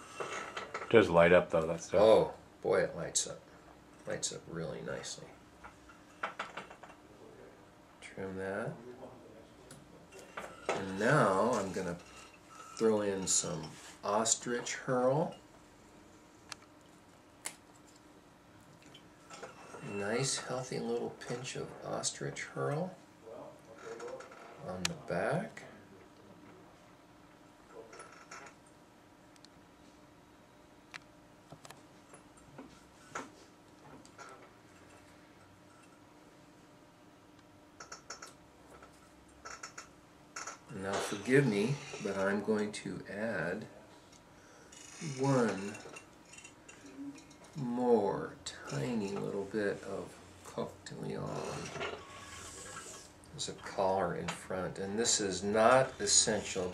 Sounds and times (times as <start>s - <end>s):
Speech: 0.9s - 3.4s, 4.0s - 5.4s, 7.2s - 9.8s, 10.7s - 12.0s, 12.8s - 15.4s, 19.8s - 25.9s, 40.7s - 43.8s, 45.0s - 45.8s, 47.6s - 51.8s, 53.3s - 56.7s.